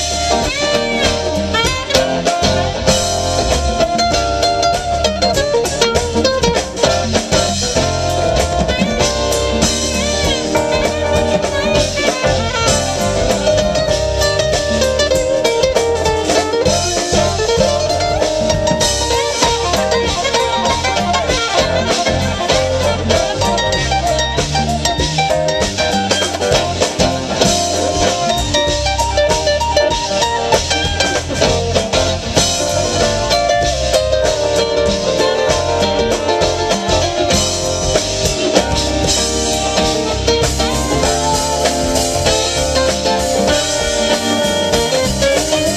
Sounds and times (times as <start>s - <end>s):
Salsa music: 0.0s - 45.7s.